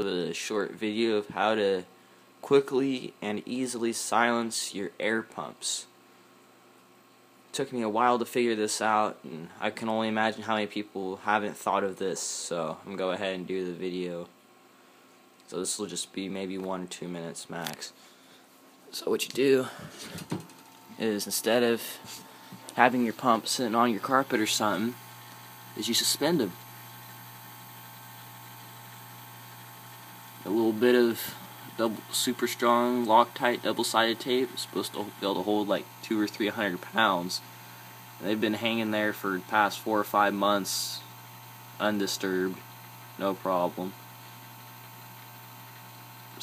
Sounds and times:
Speech: 0:00.0 - 0:06.0, 0:07.5 - 0:14.4, 0:15.5 - 0:18.0, 0:18.9 - 0:19.8, 0:21.0 - 0:22.2, 0:22.8 - 0:25.0, 0:25.8 - 0:26.6, 0:30.4 - 0:37.5, 0:38.2 - 0:41.1, 0:41.8 - 0:42.6, 0:43.2 - 0:44.0.

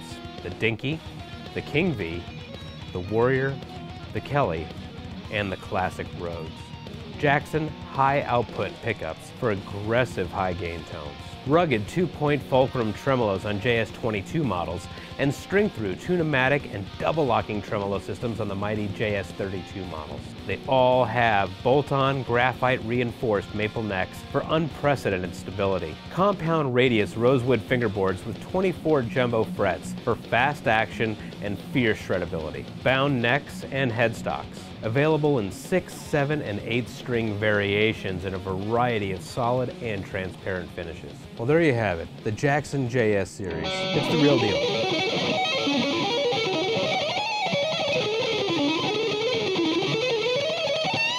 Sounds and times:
Speech: 0:00.0 - 0:02.3, 0:02.9 - 0:44.8
Guitar: 0:00.0 - 0:51.1
Heavy metal: 0:43.5 - 0:51.1.

